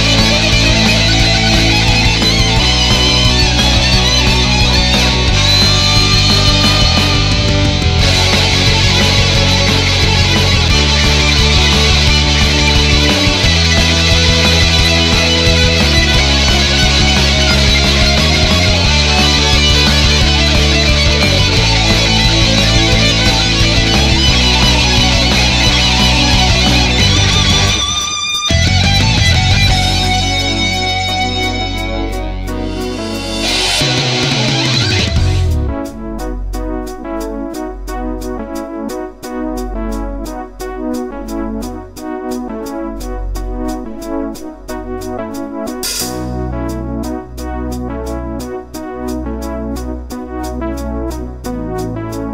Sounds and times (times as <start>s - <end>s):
Heavy metal: 0.0s - 50.2s
Guitar: 0.0s - 52.3s.